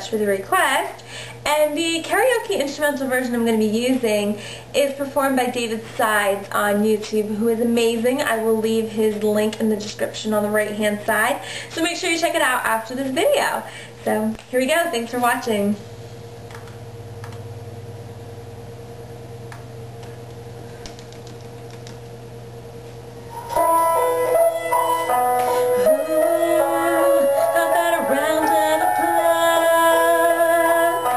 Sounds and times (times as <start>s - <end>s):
Speech: 0.0s - 15.8s
Music: 23.3s - 31.1s.